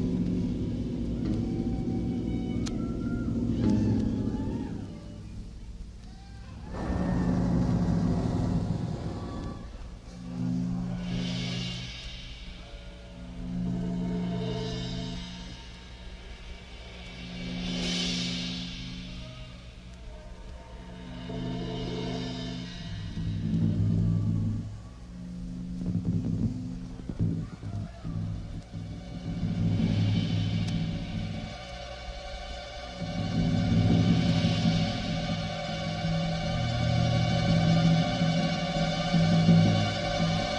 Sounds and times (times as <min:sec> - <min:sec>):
Timpani: 0:00.0 - 0:40.5.